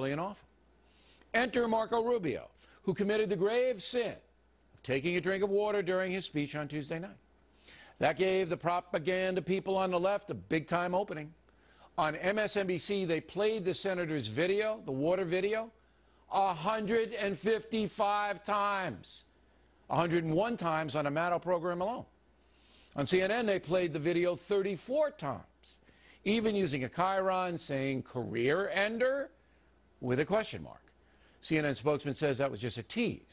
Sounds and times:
Speech: 0:00.0 - 0:00.5, 0:01.3 - 0:07.2, 0:08.0 - 0:11.4, 0:12.0 - 0:19.3, 0:19.9 - 0:22.1, 0:23.0 - 0:29.4, 0:30.0 - 0:33.3.

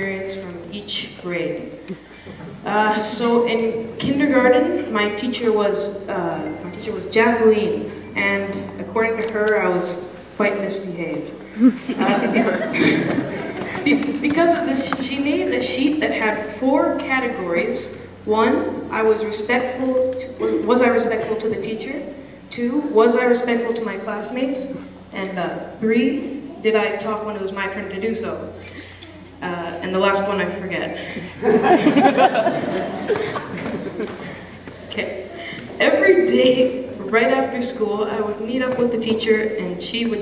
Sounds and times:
Narration, monologue: 0:00.0 - 0:11.6, 0:13.4 - 0:33.2, 0:33.9 - 0:40.2.

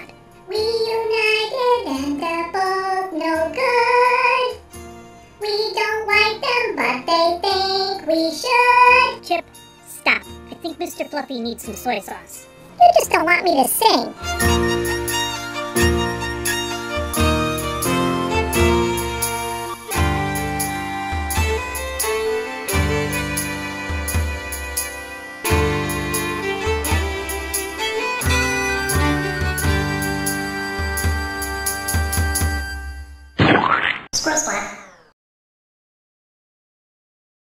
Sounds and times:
Music: 0:00.0 - 0:33.4
Speech: 0:09.2 - 0:14.2, 0:34.2 - 0:34.8.

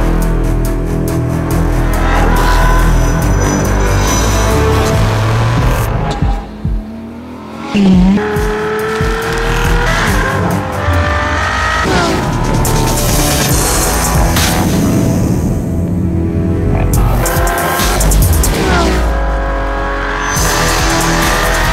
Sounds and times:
Race car, auto racing: 0:00.0 - 0:21.7.

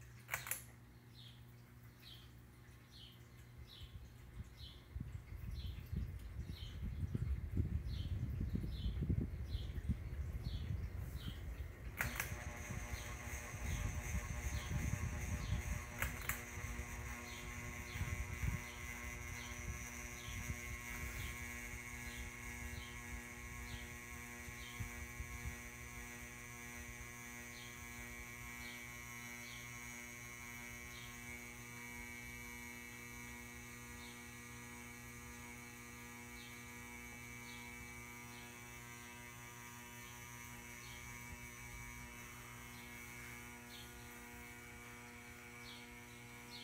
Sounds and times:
Hum: 0:00.0 - 0:46.6.

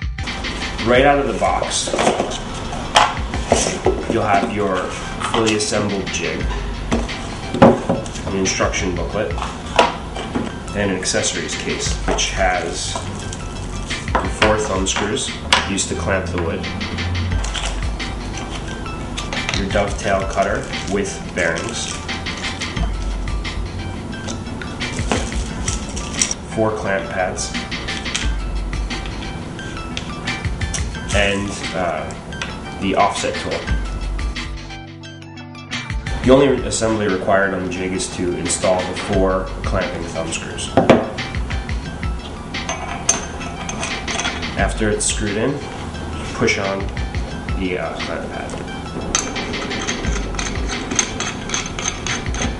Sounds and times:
Music: 0:00.0 - 0:52.5
Speech: 0:00.8 - 0:02.0, 0:04.1 - 0:06.4, 0:08.3 - 0:09.4, 0:10.8 - 0:13.0, 0:14.4 - 0:16.7, 0:19.6 - 0:21.9, 0:26.6 - 0:27.6, 0:31.1 - 0:32.1, 0:32.8 - 0:33.7, 0:36.3 - 0:40.8, 0:44.6 - 0:45.6, 0:46.4 - 0:46.9, 0:47.6 - 0:48.6.

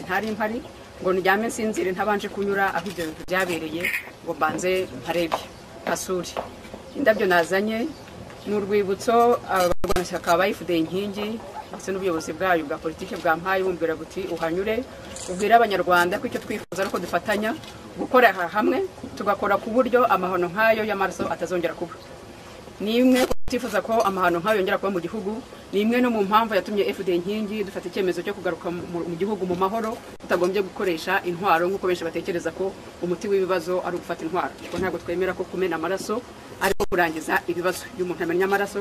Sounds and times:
Female speech, woman speaking: 0:00.0 - 0:22.0, 0:22.8 - 0:38.8
Narration, monologue: 0:00.0 - 0:38.8.

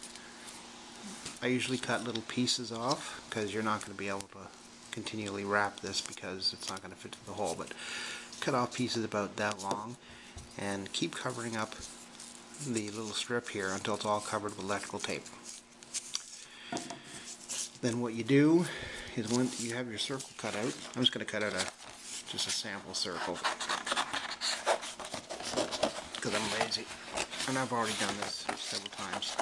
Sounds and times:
Inside, small room: 0:00.0 - 0:29.4
Speech: 0:01.4 - 0:07.8, 0:08.4 - 0:10.0, 0:10.6 - 0:11.8, 0:12.6 - 0:15.3, 0:17.8 - 0:21.7, 0:22.3 - 0:23.6, 0:26.2 - 0:29.4.

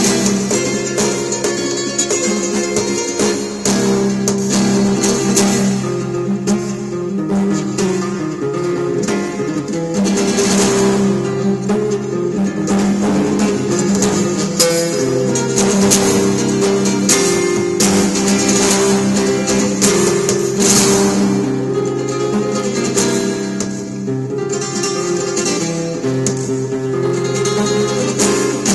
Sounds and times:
Flamenco: 0:00.0 - 0:28.7
Strum: 0:00.0 - 0:28.7.

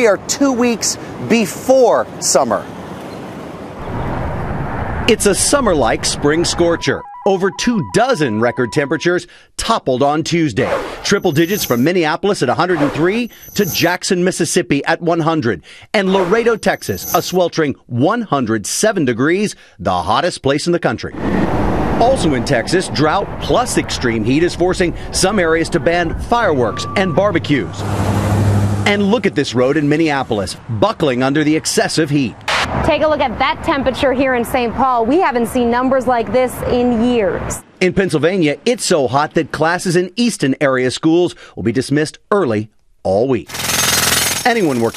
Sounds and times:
Speech: 0:00.0 - 0:02.7, 0:05.1 - 0:21.2, 0:22.0 - 0:27.8, 0:28.9 - 0:43.5, 0:44.5 - 0:44.9.

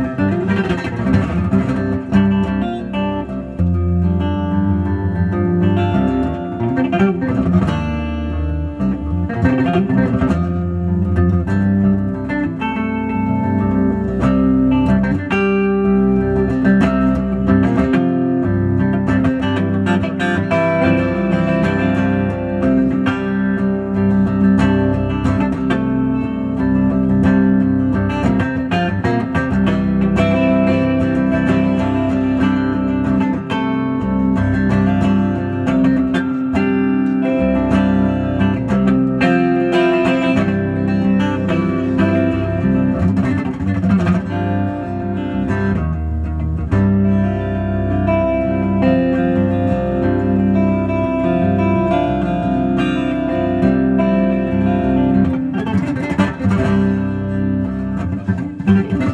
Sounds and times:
Acoustic guitar: 0:00.0 - 0:59.1
Strum: 0:00.0 - 0:59.1.

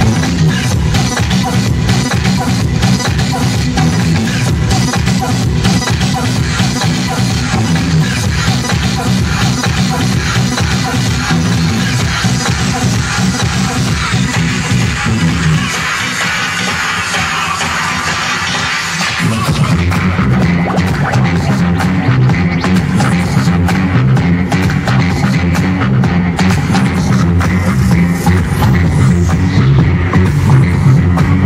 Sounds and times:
Electronic music: 0:00.0 - 0:31.4.

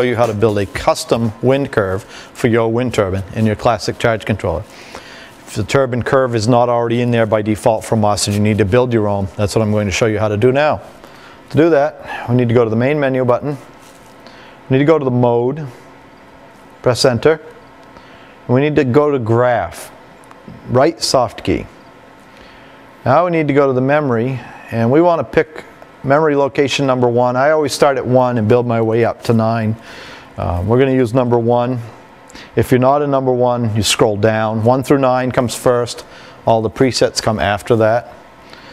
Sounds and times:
Speech: 0:00.0 - 0:04.7, 0:05.5 - 0:10.9, 0:11.5 - 0:13.7, 0:14.7 - 0:15.8, 0:16.8 - 0:17.6, 0:18.5 - 0:20.0, 0:20.6 - 0:21.8, 0:23.0 - 0:29.8, 0:30.4 - 0:32.0, 0:32.6 - 0:38.2.

